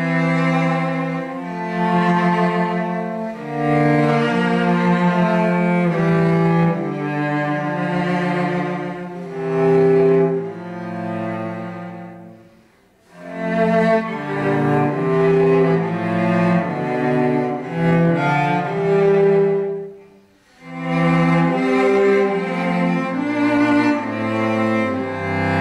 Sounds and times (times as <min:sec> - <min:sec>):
Cello: 0:00.0 - 0:25.6.